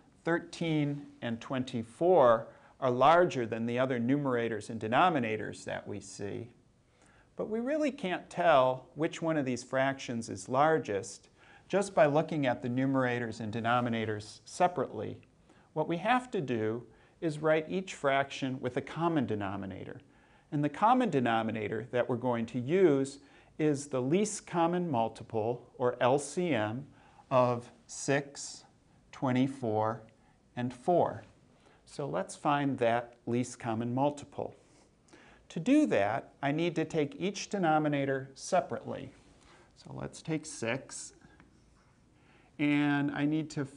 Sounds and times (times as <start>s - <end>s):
Speech: 0.2s - 6.6s, 7.4s - 34.6s, 35.5s - 39.2s, 39.8s - 41.4s, 42.6s - 43.7s.